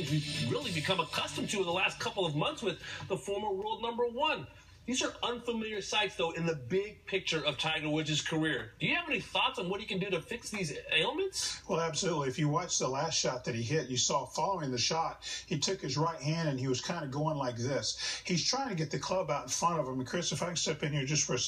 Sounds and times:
Speech: 0.0s - 21.4s.

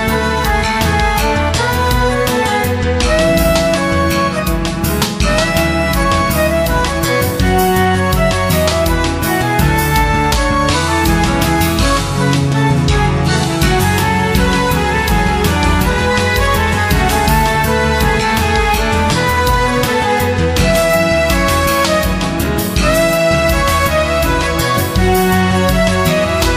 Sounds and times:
Music: 0.0s - 26.5s.

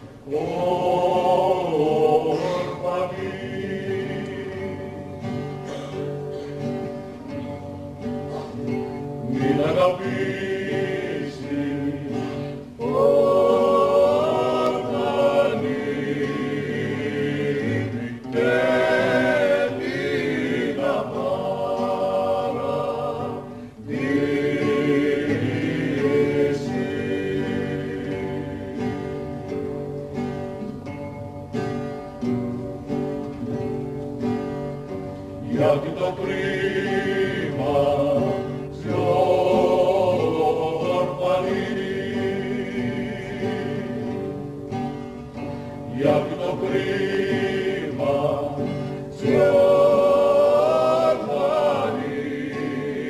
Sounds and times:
Choir: 0.0s - 30.7s, 33.4s - 53.1s
Male singing: 0.3s - 4.9s, 9.3s - 12.1s, 35.5s - 44.2s, 45.9s - 53.1s.

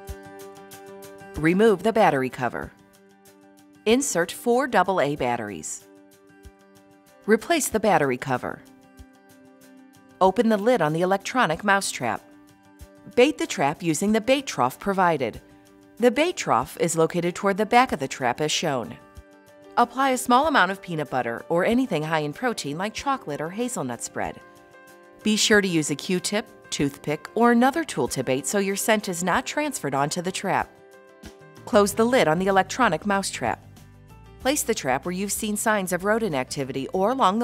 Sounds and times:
Music: 0.0s - 37.4s
Speech: 1.4s - 2.7s, 3.9s - 5.8s, 7.3s - 8.6s, 10.2s - 12.2s, 13.1s - 15.4s, 16.0s - 19.0s, 19.8s - 24.4s, 25.3s - 30.7s, 31.6s - 33.6s, 34.5s - 37.4s.

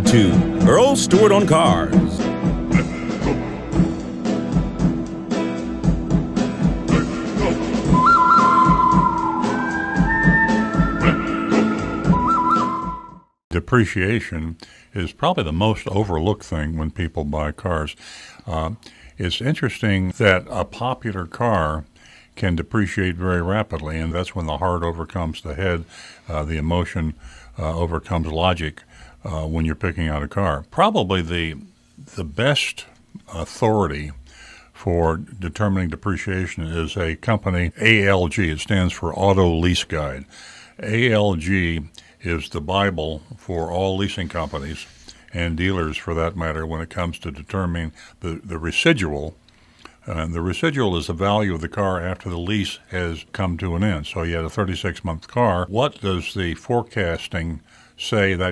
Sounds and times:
Speech: 0.0s - 2.2s, 13.5s - 34.2s, 34.8s - 49.4s, 50.0s - 58.5s.

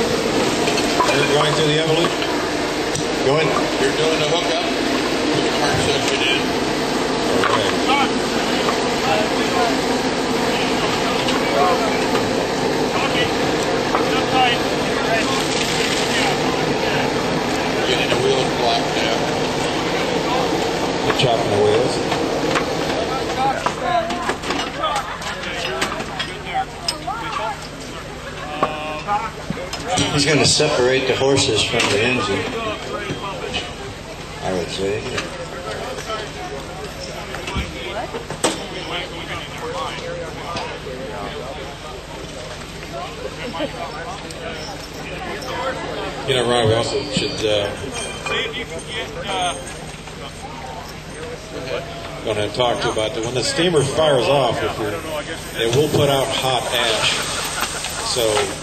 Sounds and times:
Vehicle: 0.0s - 58.6s
Speech: 23.0s - 58.6s.

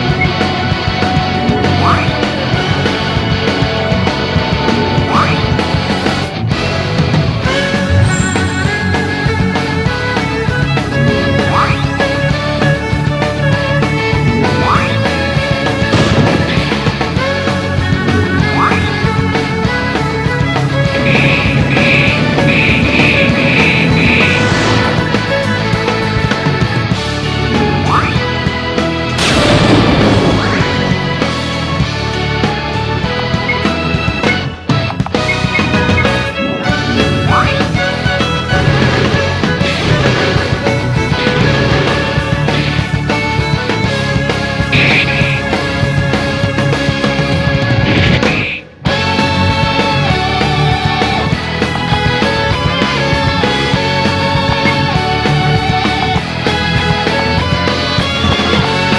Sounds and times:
Music: 0.0s - 58.9s.

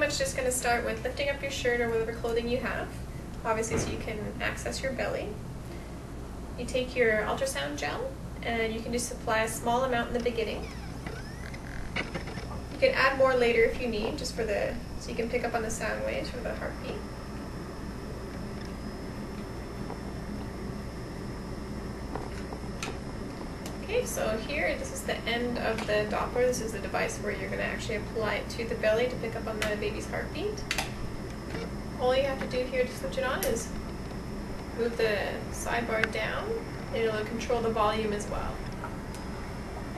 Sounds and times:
Speech: 0.0s - 5.4s, 6.6s - 10.7s, 12.8s - 17.0s, 23.8s - 30.6s, 32.0s - 33.8s, 34.8s - 38.6s.

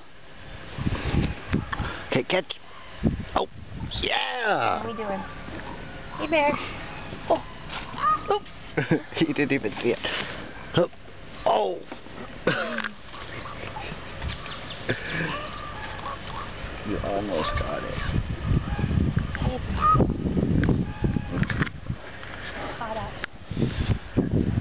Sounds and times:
Animal: 7.3s - 8.5s, 12.8s - 16.6s, 17.3s - 20.1s.

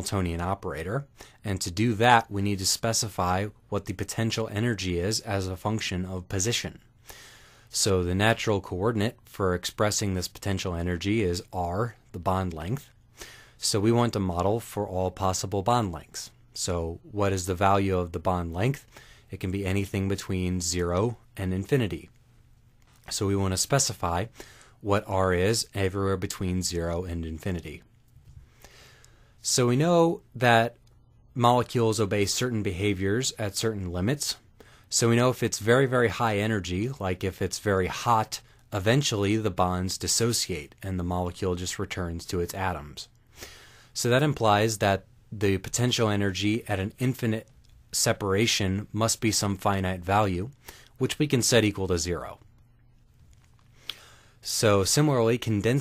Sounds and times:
Speech: 0.0s - 6.8s, 7.7s - 13.0s, 13.6s - 22.1s, 23.1s - 27.9s, 29.4s - 30.8s, 31.4s - 43.1s, 44.0s - 52.4s, 54.4s - 55.8s.

